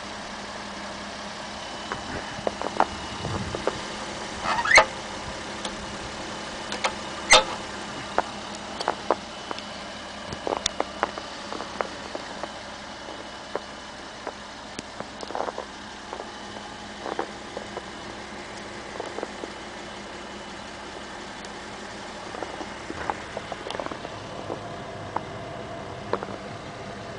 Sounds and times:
Vehicle: 0.0 - 27.1.

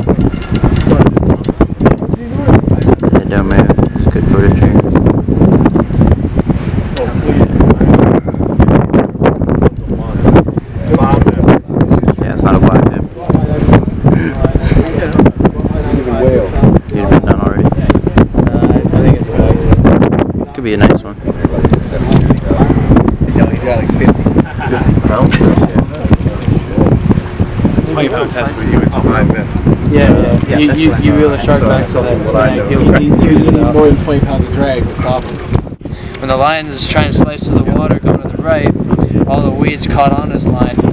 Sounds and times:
Outside, rural or natural: 0.0 - 40.9
Speech: 27.8 - 35.4, 36.2 - 40.8.

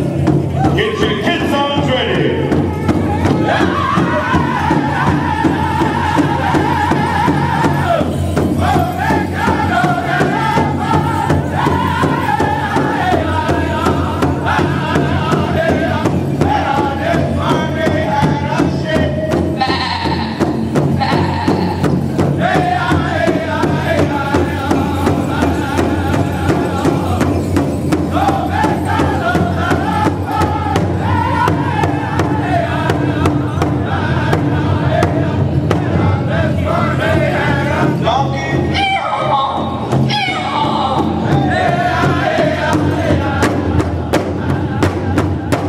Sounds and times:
Bass drum: 0.0 - 45.6.

